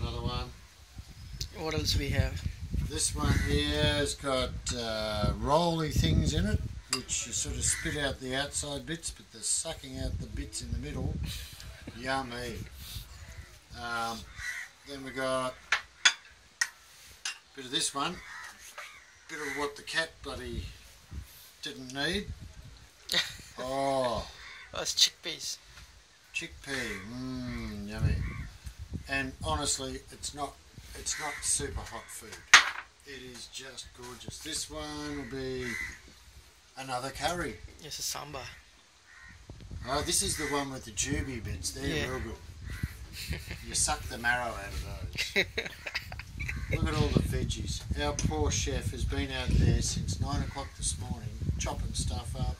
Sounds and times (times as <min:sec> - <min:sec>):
Speech: 0:00.0 - 0:00.6, 0:01.4 - 0:11.2, 0:11.9 - 0:12.7, 0:13.7 - 0:14.3, 0:14.9 - 0:15.6, 0:17.6 - 0:18.3, 0:19.3 - 0:20.8, 0:21.6 - 0:22.3, 0:23.6 - 0:25.6, 0:26.3 - 0:28.3, 0:29.1 - 0:32.5, 0:33.1 - 0:35.9, 0:36.8 - 0:38.6, 0:39.8 - 0:42.4, 0:43.6 - 0:45.2, 0:46.7 - 0:52.5.